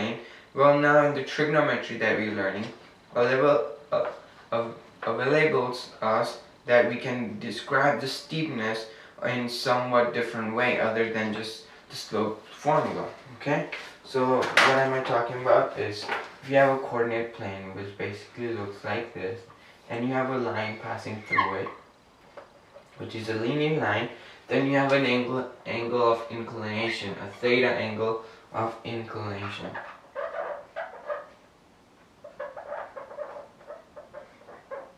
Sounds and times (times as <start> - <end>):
Speech: 0.0 - 21.8, 23.0 - 29.8.